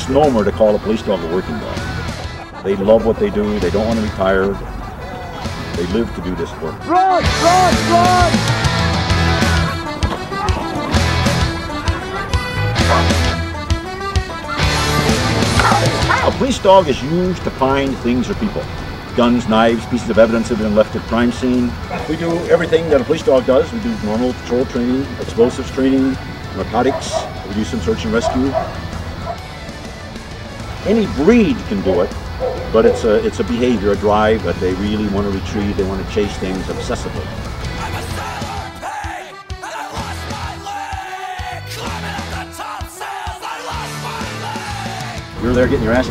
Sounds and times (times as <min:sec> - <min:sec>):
Speech: 0:00.0 - 0:01.8, 0:02.6 - 0:04.6, 0:16.2 - 0:28.6, 0:30.8 - 0:37.3, 0:45.4 - 0:46.1
Music: 0:00.0 - 0:46.1
Bow-wow: 0:10.3 - 0:11.0, 0:12.0 - 0:13.4, 0:15.4 - 0:16.3, 0:21.9 - 0:22.2, 0:26.8 - 0:27.4, 0:28.2 - 0:29.5, 0:32.4 - 0:33.2
Whimper (dog): 0:10.3 - 0:11.1.